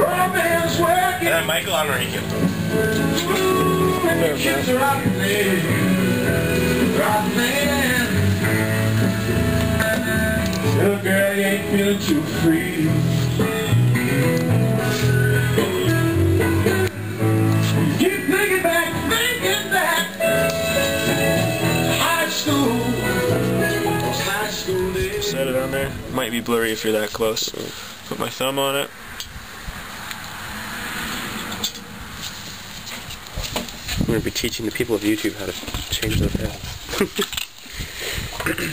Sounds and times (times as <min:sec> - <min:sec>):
Speech: 0:00.0 - 0:02.3, 0:25.2 - 0:28.9, 0:34.1 - 0:36.6
Music: 0:00.0 - 0:26.2.